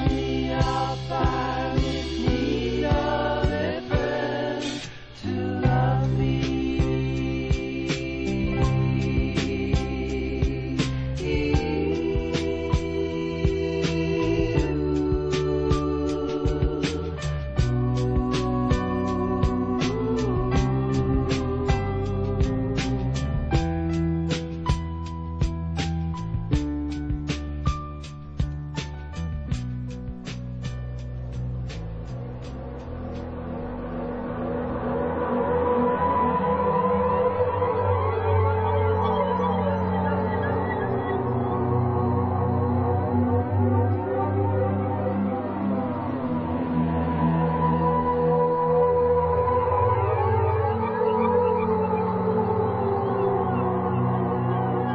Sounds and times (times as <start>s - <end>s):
Music: 0.0s - 54.9s.